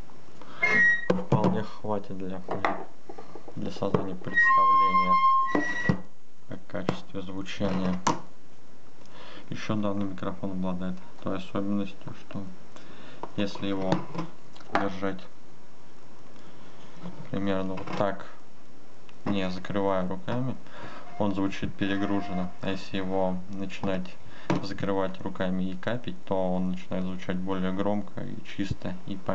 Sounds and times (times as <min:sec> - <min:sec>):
Speech: 0:01.1 - 0:02.7, 0:03.6 - 0:05.2, 0:06.5 - 0:08.1, 0:09.5 - 0:12.6, 0:13.4 - 0:15.3, 0:17.2 - 0:18.4, 0:19.2 - 0:29.3.